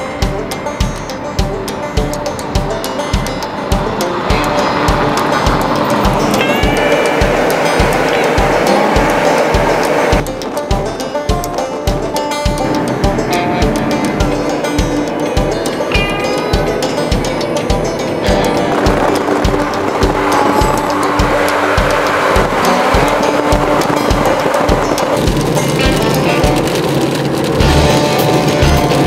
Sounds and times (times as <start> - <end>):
Music: 0.0 - 29.0
Outside, rural or natural: 0.0 - 29.0
Tire squeal: 17.9 - 29.0.